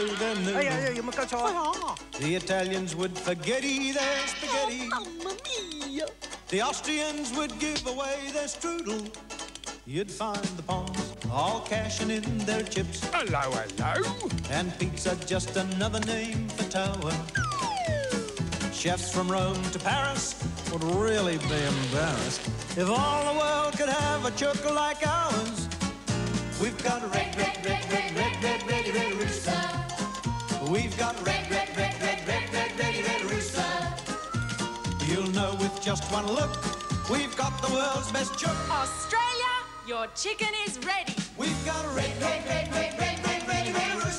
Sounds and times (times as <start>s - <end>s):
Music: 0.0s - 44.1s.